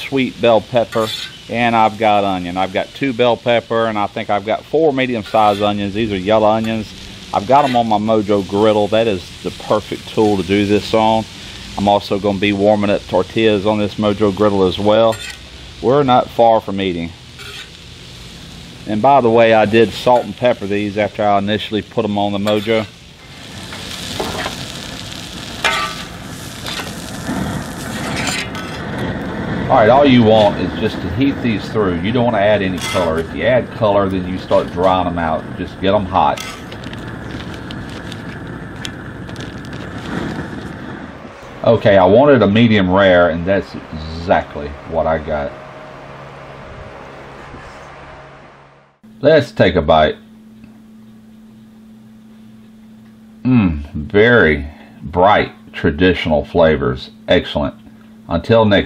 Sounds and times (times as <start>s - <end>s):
Speech: 0.0s - 15.2s, 15.8s - 17.2s, 18.9s - 22.9s, 29.7s - 36.4s, 41.6s - 45.6s, 49.2s - 50.2s, 53.4s - 58.8s
Outside, urban or manmade: 0.0s - 49.2s.